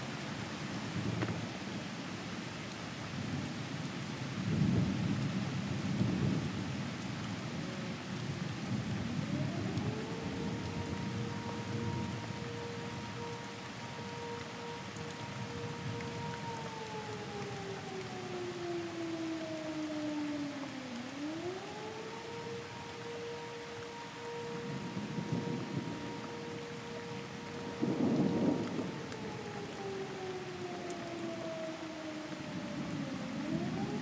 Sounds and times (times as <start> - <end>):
Siren: 7.2 - 34.0.